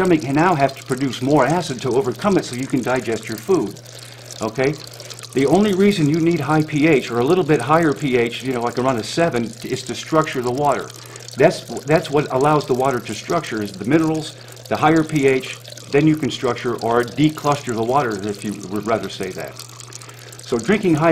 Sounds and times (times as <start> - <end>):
Speech: 0.0 - 3.8, 4.4 - 4.8, 5.4 - 19.6, 20.5 - 21.1
Water: 0.0 - 21.1.